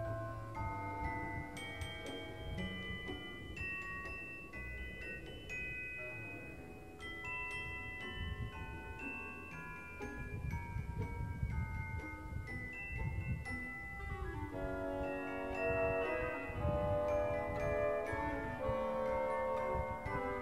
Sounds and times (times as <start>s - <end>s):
Glockenspiel: 0.0s - 20.4s
Marimba, xylophone: 0.0s - 20.4s.